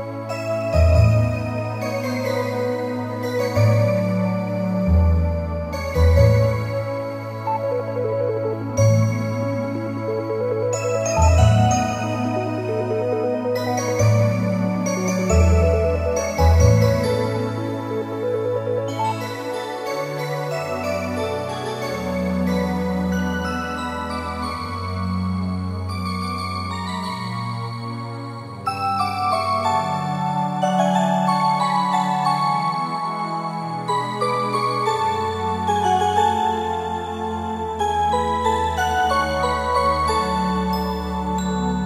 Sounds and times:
Music: 0.0s - 41.8s.

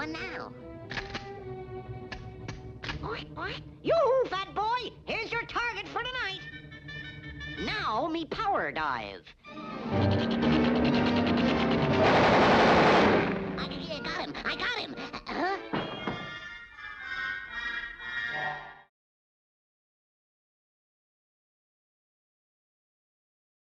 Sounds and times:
Music: 0.0s - 18.9s.

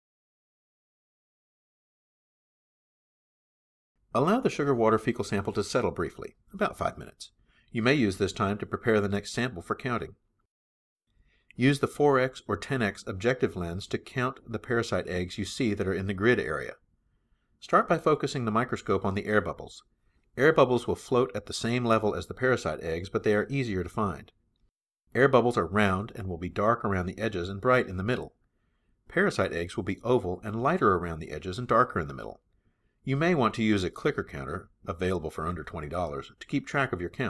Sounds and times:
Speech: 4.1s - 10.2s, 11.5s - 16.8s, 17.6s - 24.4s, 25.1s - 28.4s, 29.1s - 32.4s, 33.0s - 37.3s.

